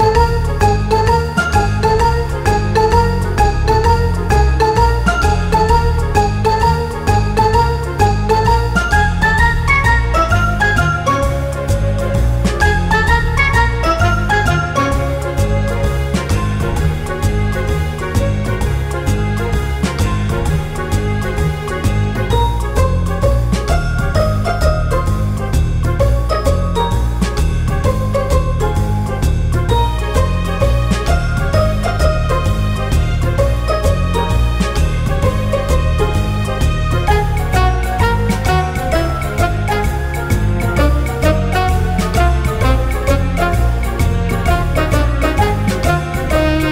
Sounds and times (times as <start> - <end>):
Music: 0.0 - 46.7.